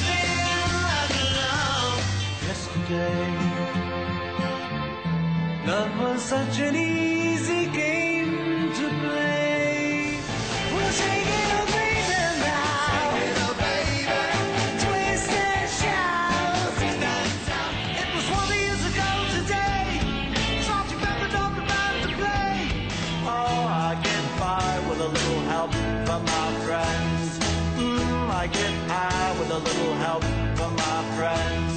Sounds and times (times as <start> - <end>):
Music: 0.0 - 31.7.